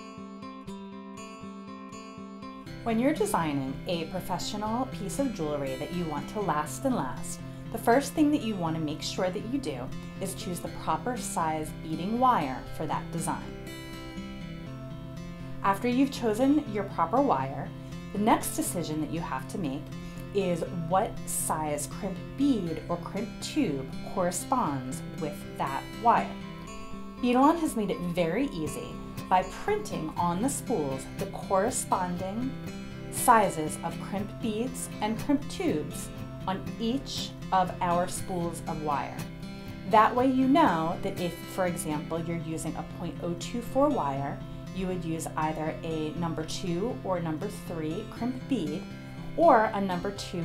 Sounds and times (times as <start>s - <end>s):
Music: 0.0s - 50.4s
Speech: 2.9s - 13.5s, 15.6s - 19.8s, 20.4s - 26.4s, 27.2s - 32.5s, 33.2s - 39.2s, 39.9s - 48.8s, 49.4s - 50.4s.